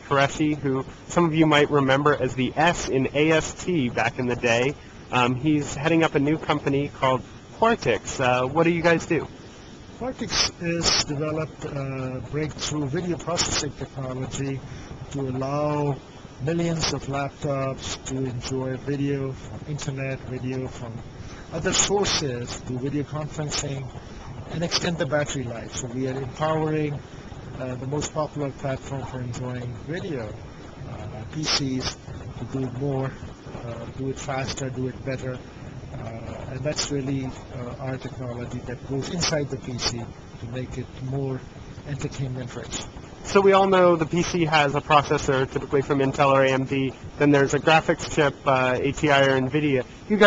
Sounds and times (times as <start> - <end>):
Speech: 0.0 - 9.3, 10.0 - 50.2.